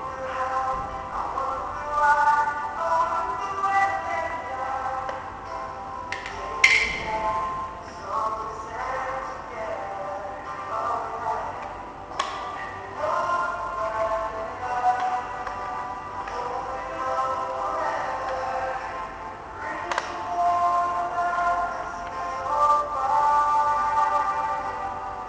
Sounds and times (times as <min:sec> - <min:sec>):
Music: 0:00.0 - 0:25.2.